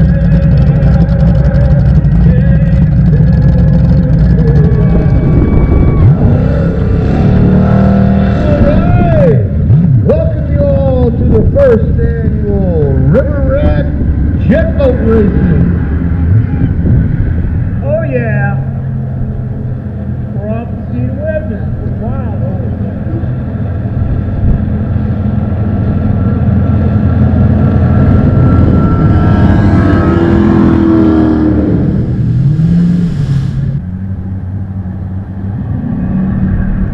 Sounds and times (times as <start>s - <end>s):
Motorboat, speedboat: 0.0s - 36.9s
Speech: 8.4s - 9.5s, 10.1s - 15.6s, 17.8s - 18.7s, 20.3s - 23.0s.